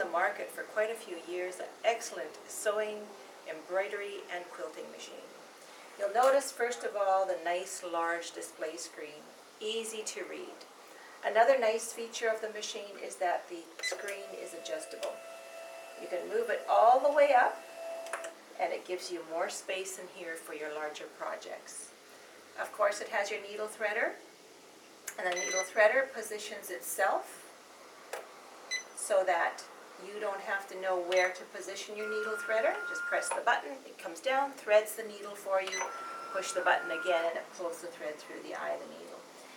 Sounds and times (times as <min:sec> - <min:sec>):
Speech: 0:00.0 - 0:05.4, 0:06.0 - 0:15.2, 0:16.0 - 0:17.6, 0:18.6 - 0:22.0, 0:22.6 - 0:24.2, 0:25.1 - 0:27.5, 0:29.0 - 0:35.8, 0:36.4 - 0:39.3.